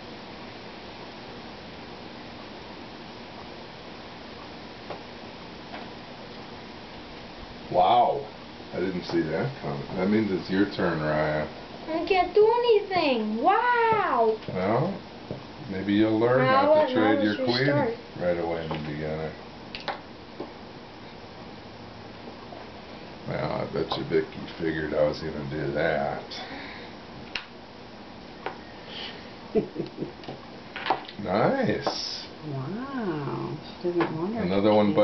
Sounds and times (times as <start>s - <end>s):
Inside, small room: 0.0s - 35.0s.